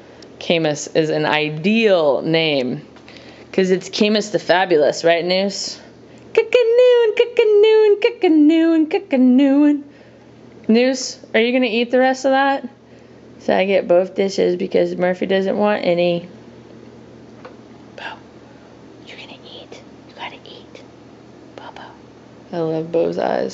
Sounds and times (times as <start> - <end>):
Speech: 0.4 - 2.9, 3.6 - 9.8, 10.7 - 12.8, 13.4 - 16.3, 22.5 - 23.5
Whispering: 18.0 - 18.2, 19.0 - 20.9, 21.6 - 22.0.